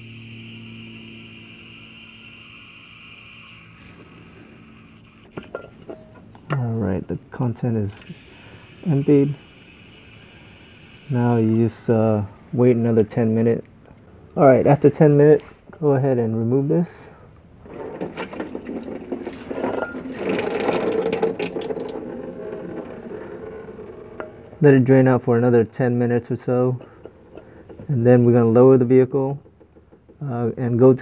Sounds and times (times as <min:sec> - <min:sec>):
Trickle, dribble: 0:18.0 - 0:22.1.